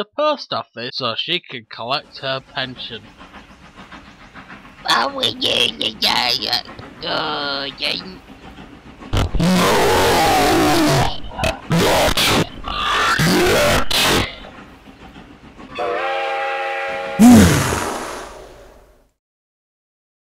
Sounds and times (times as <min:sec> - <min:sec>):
Outside, rural or natural: 0:17.2 - 0:19.0.